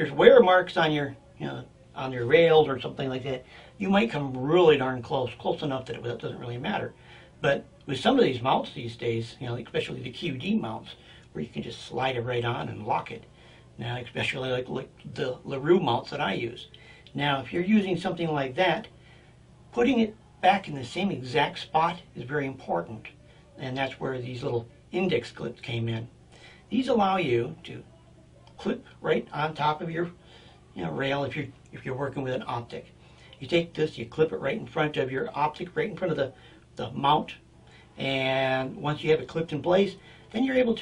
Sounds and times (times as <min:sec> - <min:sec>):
Speech: 0:00.0 - 0:18.9, 0:19.7 - 0:37.4, 0:38.0 - 0:40.8.